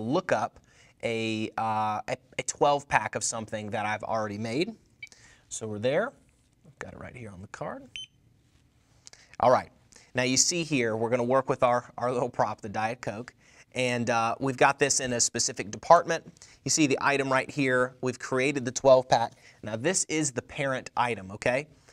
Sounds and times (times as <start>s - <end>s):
Speech: 0.0s - 4.8s, 5.5s - 7.9s, 9.4s - 21.7s.